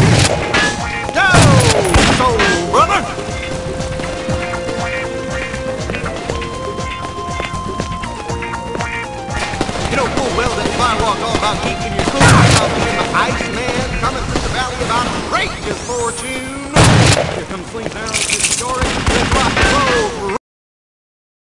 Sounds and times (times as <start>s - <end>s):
Fusillade: 9.4s - 13.0s, 18.8s - 20.0s.